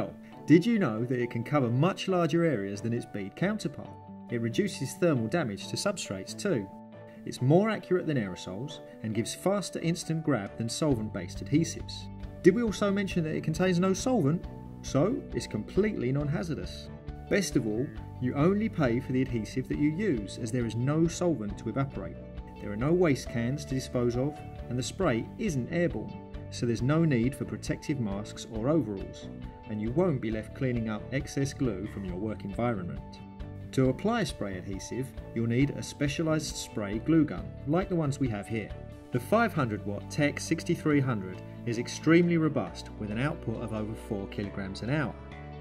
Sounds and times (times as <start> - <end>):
Speech: 0.0 - 45.2
Music: 0.0 - 45.6.